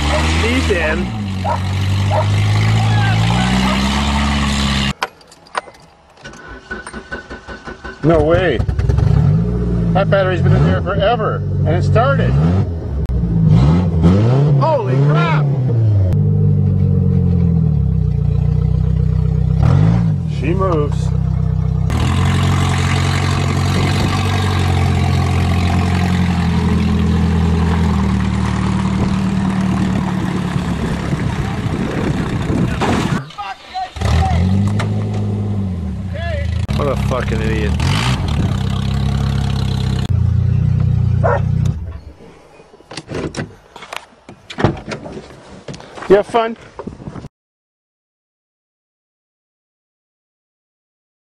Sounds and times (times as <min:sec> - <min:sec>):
Speech: 0:00.0 - 0:01.1, 0:02.8 - 0:03.7, 0:08.0 - 0:08.7, 0:10.0 - 0:12.4, 0:14.6 - 0:15.5, 0:20.3 - 0:21.2, 0:32.6 - 0:34.5, 0:36.1 - 0:37.8, 0:46.0 - 0:46.6
Car: 0:00.0 - 0:45.1
Outside, urban or manmade: 0:00.0 - 0:47.3.